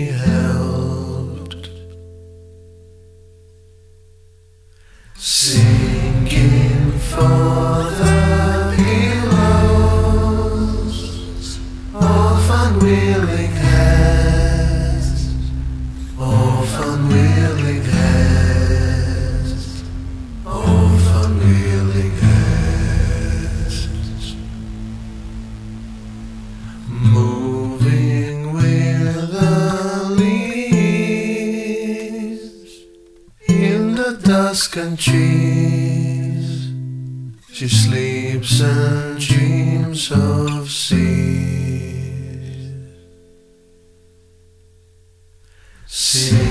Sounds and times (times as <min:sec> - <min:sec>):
Male singing: 0:00.0 - 0:01.8, 0:05.2 - 0:15.5, 0:16.1 - 0:19.9, 0:20.5 - 0:24.5, 0:26.9 - 0:32.8, 0:33.4 - 0:36.8, 0:37.5 - 0:43.0, 0:45.9 - 0:46.5
Music: 0:00.0 - 0:46.5.